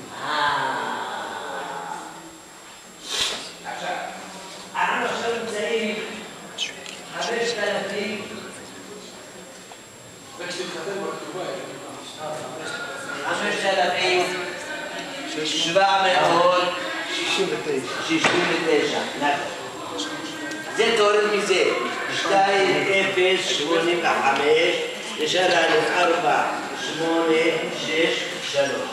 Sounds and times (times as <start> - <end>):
Inside, large room or hall: 0.0 - 28.9.